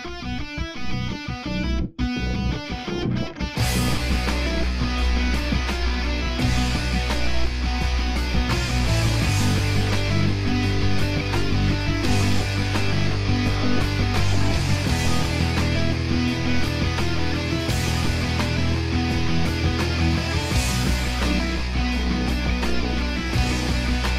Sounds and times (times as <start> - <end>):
Heavy metal: 0.0 - 24.1.